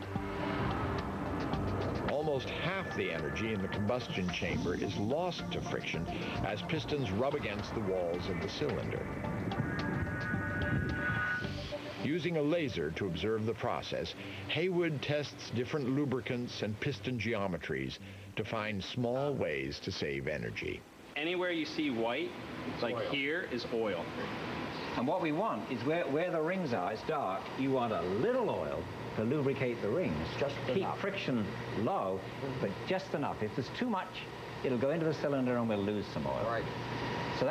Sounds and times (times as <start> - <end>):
Speech: 2.1 - 9.1, 12.0 - 24.2, 24.9 - 36.7.